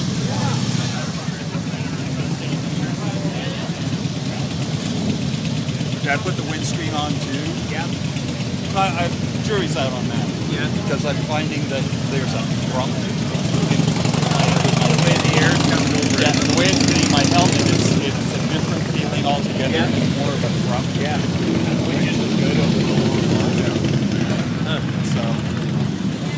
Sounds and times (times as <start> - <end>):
Motorcycle: 0.0 - 26.3
Speech: 0.2 - 4.8, 5.8 - 8.0, 8.7 - 25.5.